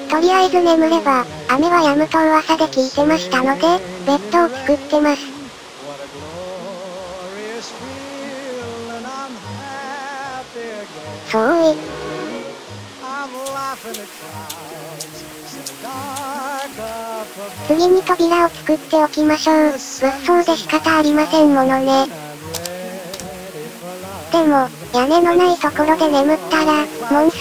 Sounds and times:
Music: 0:00.0 - 0:27.4
Male singing: 0:00.5 - 0:01.7, 0:02.6 - 0:11.6, 0:13.0 - 0:18.0, 0:19.3 - 0:27.4.

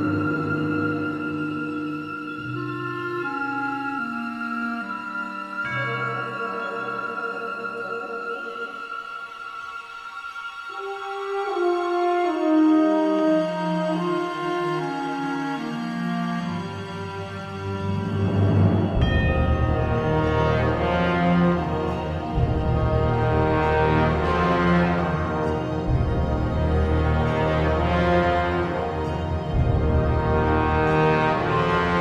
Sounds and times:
Scary music: 0:00.0 - 0:32.0.

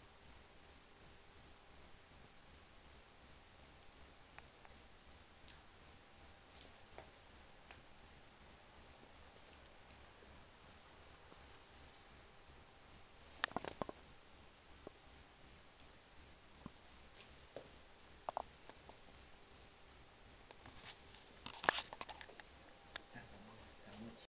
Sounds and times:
Speech: 0:23.1 - 0:24.2.

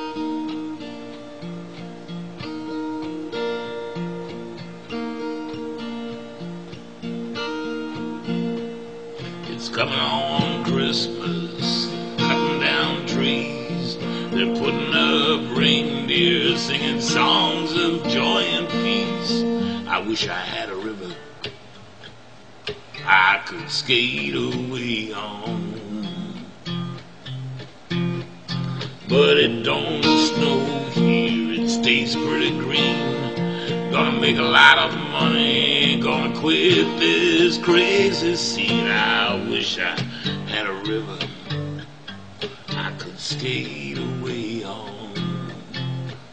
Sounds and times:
Music: 0:00.0 - 0:46.3.

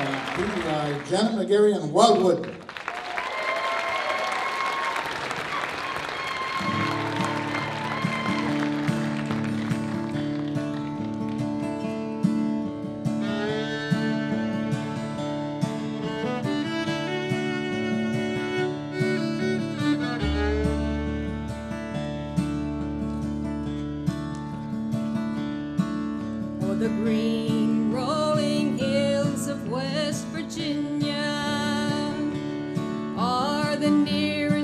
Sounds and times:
Bluegrass: 0:06.2 - 0:34.6.

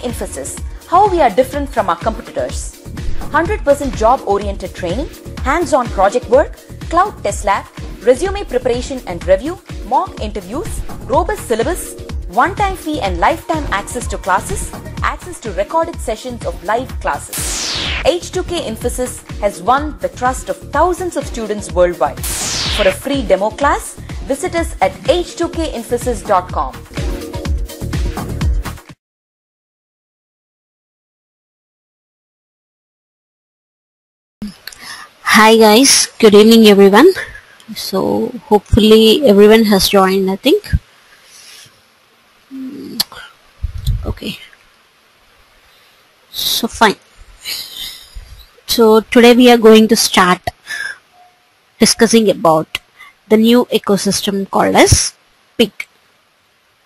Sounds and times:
Speech: 0:00.0 - 0:02.7, 0:03.4 - 0:17.3, 0:18.1 - 0:22.2, 0:22.8 - 0:26.8, 0:35.3 - 0:40.8, 0:42.5 - 0:43.3, 0:43.9 - 0:44.5, 0:46.4 - 0:47.0, 0:48.7 - 0:50.9, 0:51.8 - 0:55.9
Music: 0:00.0 - 0:29.0.

